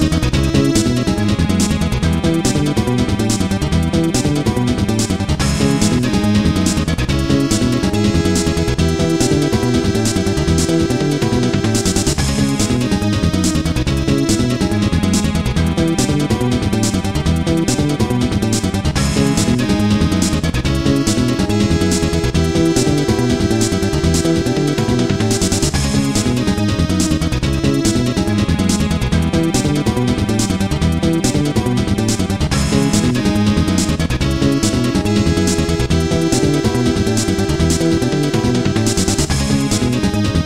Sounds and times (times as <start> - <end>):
Video game music: 0.0 - 40.4.